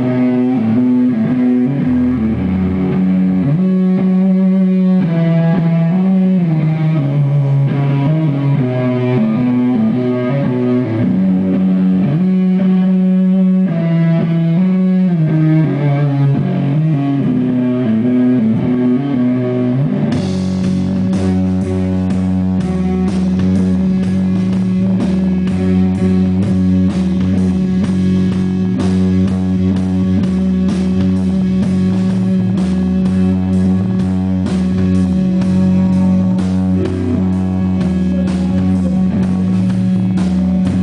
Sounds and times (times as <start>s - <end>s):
Music: 0.0s - 40.8s.